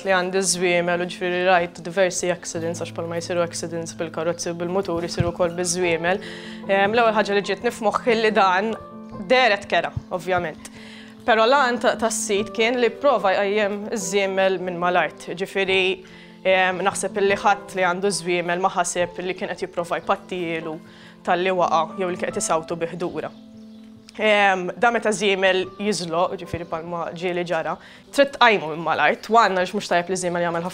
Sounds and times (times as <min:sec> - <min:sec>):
Speech: 0:00.0 - 0:10.7, 0:11.3 - 0:23.3, 0:24.2 - 0:30.7
Music: 0:00.0 - 0:30.7.